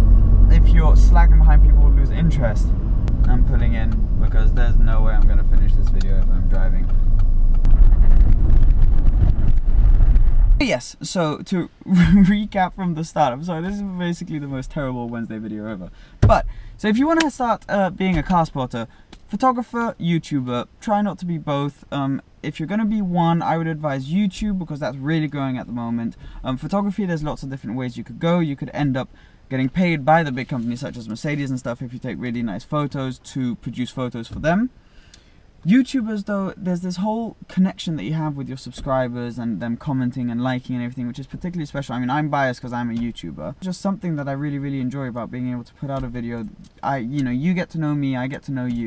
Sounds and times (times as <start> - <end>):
Car: 0.0 - 10.7, 11.4 - 48.8
Outside, rural or natural: 0.0 - 10.8
Outside, urban or manmade: 0.0 - 48.8
Speech: 0.5 - 6.9, 10.6 - 34.8, 35.6 - 48.8.